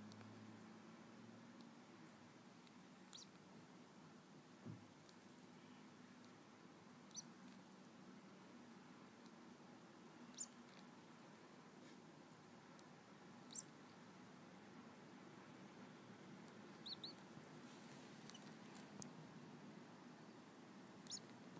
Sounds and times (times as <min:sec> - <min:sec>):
Bird: 0:03.1 - 0:03.4, 0:07.1 - 0:07.4, 0:10.3 - 0:10.8, 0:13.4 - 0:13.8, 0:16.7 - 0:17.2, 0:18.2 - 0:18.6, 0:21.0 - 0:21.4.